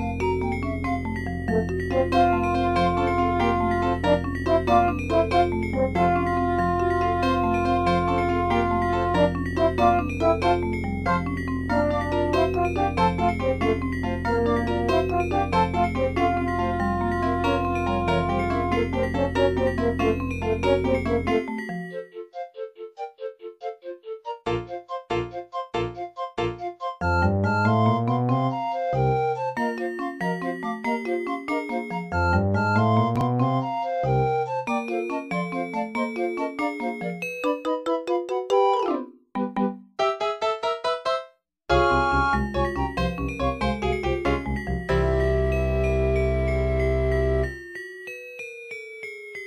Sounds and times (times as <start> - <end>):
Background music: 0.0 - 40.3, 41.7 - 47.6.